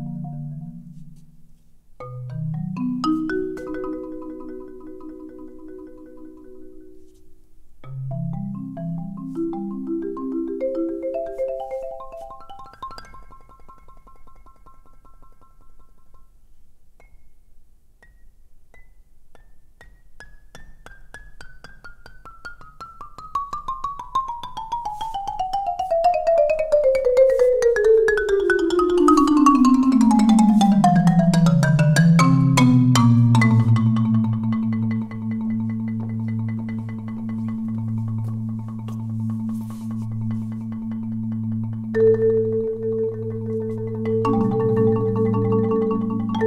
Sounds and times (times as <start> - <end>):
Percussion: 0.0 - 46.4.